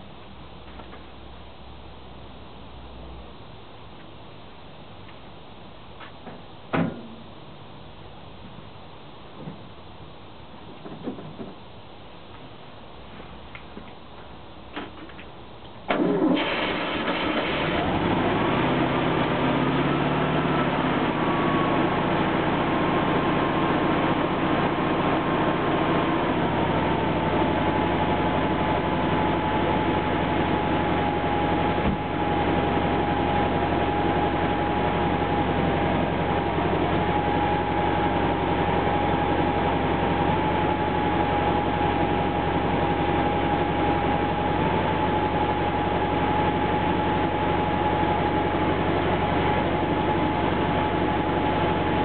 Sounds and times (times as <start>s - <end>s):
Idling: 16.0s - 52.0s.